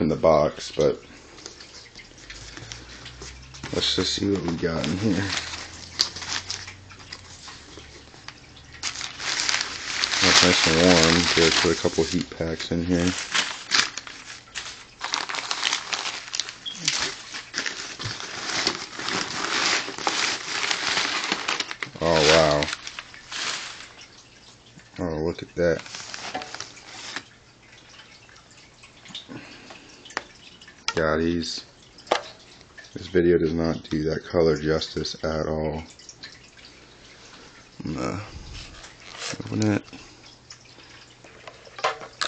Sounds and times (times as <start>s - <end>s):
Speech: 0.0s - 1.0s, 3.7s - 5.4s, 10.2s - 13.2s, 22.0s - 22.7s, 25.0s - 25.8s, 31.0s - 31.7s, 33.0s - 35.9s, 37.8s - 38.3s, 39.3s - 40.0s
Inside, small room: 0.0s - 42.2s.